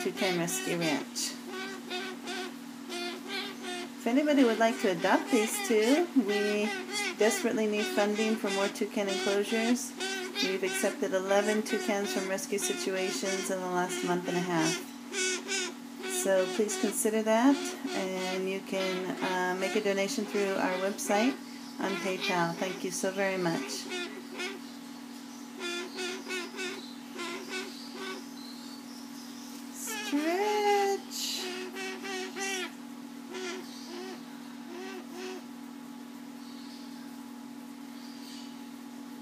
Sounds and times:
Speech: 0:00.0 - 0:01.4, 0:04.0 - 0:14.8, 0:16.2 - 0:23.9, 0:29.8 - 0:31.5
Bird: 0:00.0 - 0:30.2.

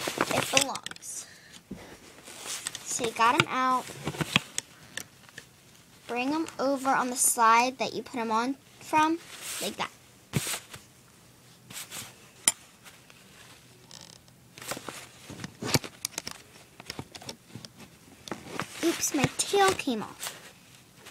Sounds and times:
Speech: 0:00.3 - 0:01.3, 0:02.9 - 0:03.8, 0:06.1 - 0:09.9, 0:18.8 - 0:20.2.

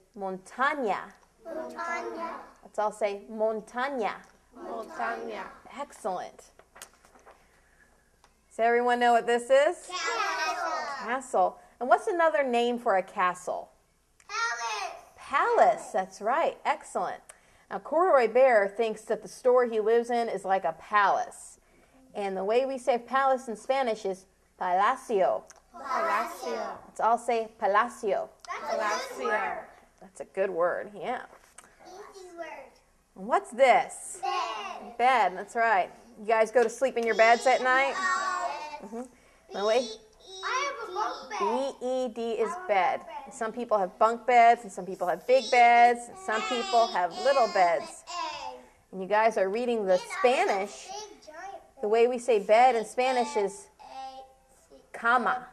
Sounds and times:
Child speech, kid speaking: 0:01.4 - 0:03.3, 0:04.6 - 0:05.8, 0:09.8 - 0:11.3, 0:14.3 - 0:15.2, 0:25.7 - 0:26.9, 0:28.4 - 0:29.8, 0:31.8 - 0:32.8, 0:34.1 - 0:35.0, 0:37.0 - 0:38.9, 0:39.5 - 0:43.6, 0:45.0 - 0:48.7, 0:49.7 - 0:51.8, 0:52.6 - 0:55.0.

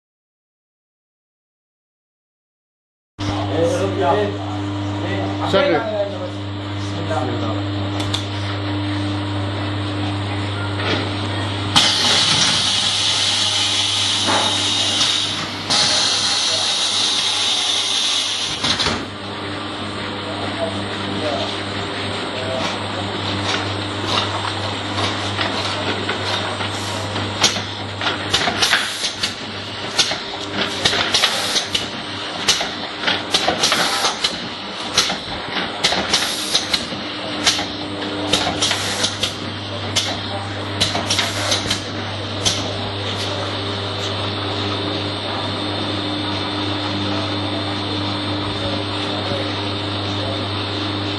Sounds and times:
Speech: 0:03.3 - 0:07.9, 0:20.2 - 0:23.6, 0:39.7 - 0:51.1.

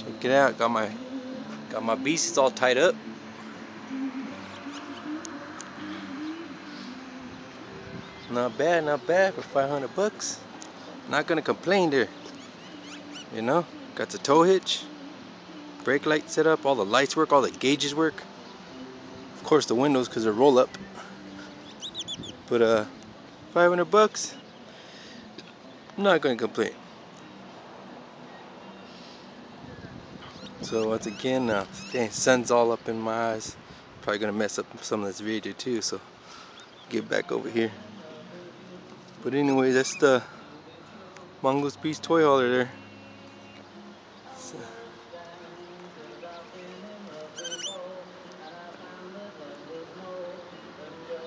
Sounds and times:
Speech: 0:01.7 - 0:03.0, 0:08.3 - 0:10.4, 0:11.1 - 0:12.1, 0:13.3 - 0:14.9, 0:15.8 - 0:18.2, 0:19.4 - 0:20.8, 0:23.6 - 0:24.4, 0:26.0 - 0:26.8, 0:30.6 - 0:36.0, 0:36.9 - 0:37.9, 0:39.2 - 0:40.4, 0:41.4 - 0:42.8.

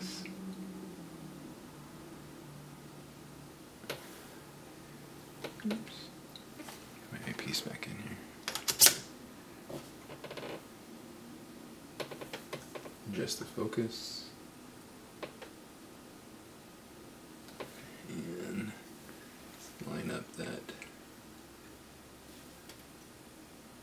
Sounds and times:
Inside, small room: 0:00.0 - 0:23.8
Speech: 0:07.1 - 0:08.2, 0:13.1 - 0:14.4, 0:19.8 - 0:20.9.

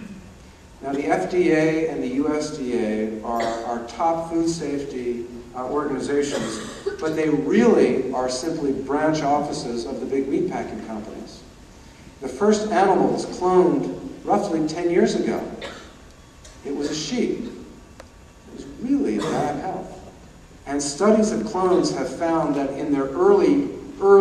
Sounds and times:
Narration, monologue: 0:00.0 - 0:24.2
Male speech, man speaking: 0:00.8 - 0:11.4, 0:12.2 - 0:15.6, 0:16.6 - 0:17.6, 0:18.5 - 0:20.0, 0:20.7 - 0:24.2.

